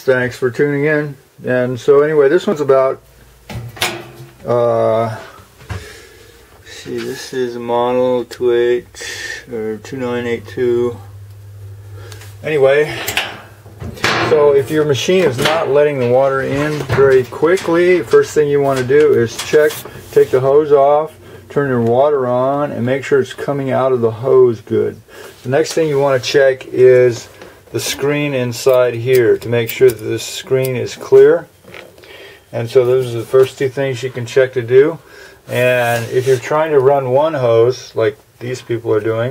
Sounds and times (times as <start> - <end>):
Speech: 0.0 - 3.0, 4.4 - 5.4, 6.6 - 11.1, 12.4 - 13.2, 14.0 - 31.5, 32.5 - 39.3.